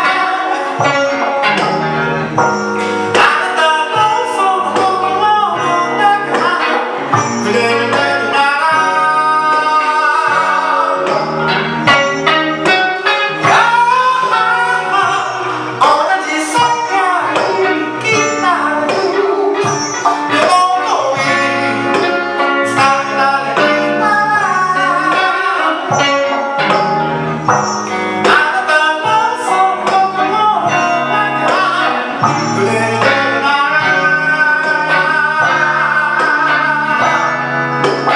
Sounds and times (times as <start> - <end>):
Blues: 0.0 - 38.1.